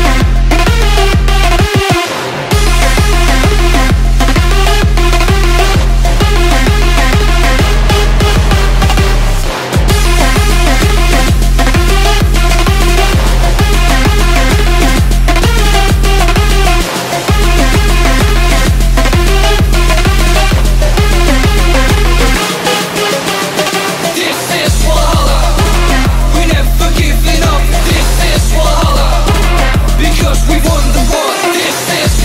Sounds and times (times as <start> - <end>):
Music: 0.0 - 32.2.